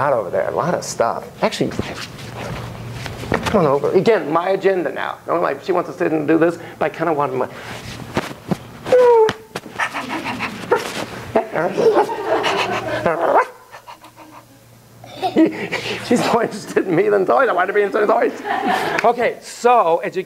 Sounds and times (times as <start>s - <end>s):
Bow-wow: 13.3s - 13.6s.